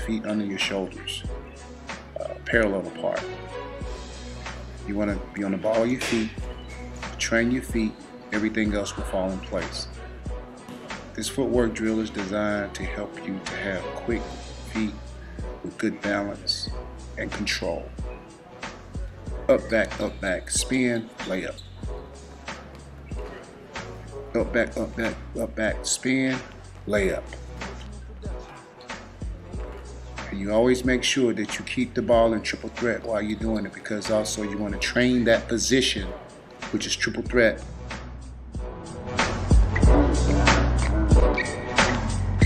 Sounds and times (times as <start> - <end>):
Speech: 0.0 - 1.3, 2.2 - 3.3, 4.9 - 6.4, 7.2 - 9.9, 11.1 - 15.0, 15.6 - 17.9, 19.5 - 21.6, 24.4 - 27.4, 30.2 - 37.6
Music: 0.0 - 42.4.